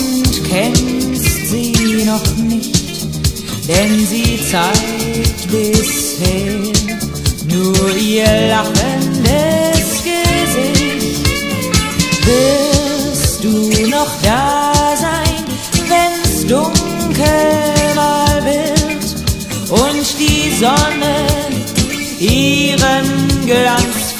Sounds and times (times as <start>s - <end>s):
Music: 0.0s - 24.1s.